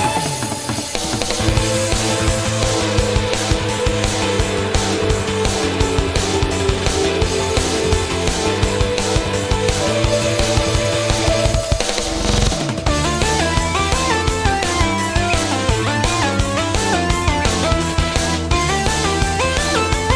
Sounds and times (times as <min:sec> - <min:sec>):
Pop music: 0:00.0 - 0:20.1.